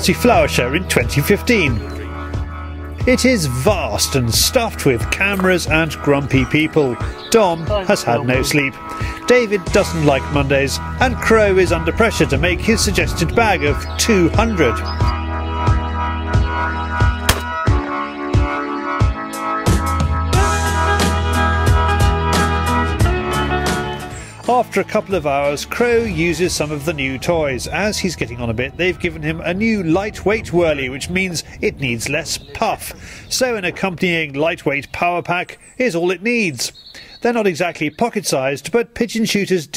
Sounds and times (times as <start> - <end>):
Speech: 0.0 - 2.1, 3.0 - 15.1, 24.4 - 39.7
Music: 0.0 - 32.0
Bird: 5.3 - 9.2, 12.7 - 15.2, 32.3 - 38.3.